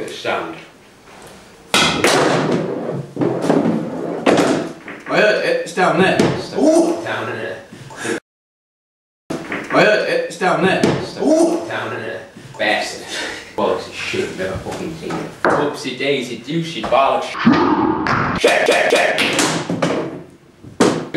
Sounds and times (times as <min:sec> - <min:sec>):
Speech: 0:00.0 - 0:00.7, 0:05.1 - 0:07.7, 0:09.7 - 0:17.4.